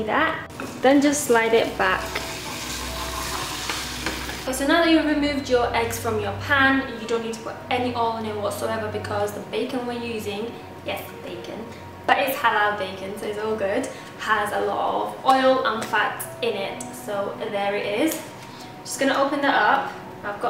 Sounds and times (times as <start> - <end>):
Music: 0.0 - 20.5
Speech: 4.5 - 18.2, 18.9 - 20.5.